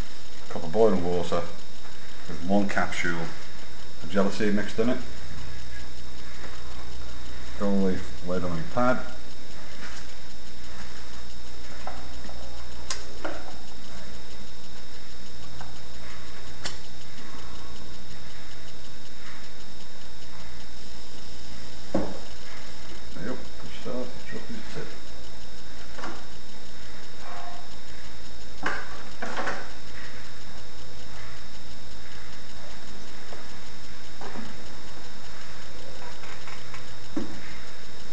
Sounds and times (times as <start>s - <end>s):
Speech: 0.5s - 1.6s, 2.4s - 3.4s, 4.0s - 5.1s, 7.6s - 9.2s, 23.2s - 25.0s.